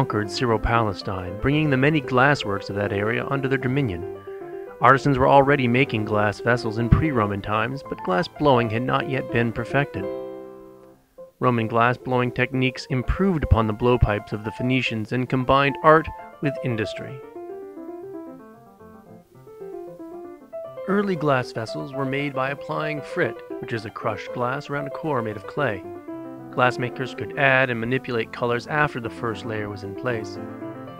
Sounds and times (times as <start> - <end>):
Speech: 0.0 - 4.1, 4.8 - 10.1, 11.4 - 17.2, 20.9 - 25.9, 26.6 - 30.4
Music: 0.0 - 30.9.